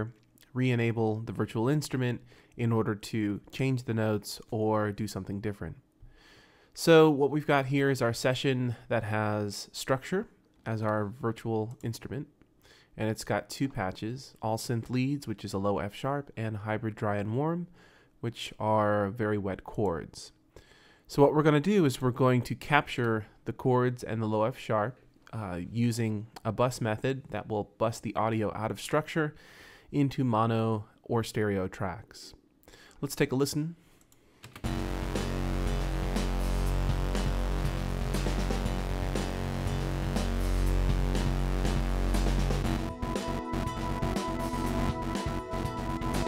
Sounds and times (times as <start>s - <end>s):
Speech: 0.0s - 5.8s, 6.8s - 12.3s, 13.0s - 20.4s, 21.1s - 32.4s, 33.0s - 33.8s.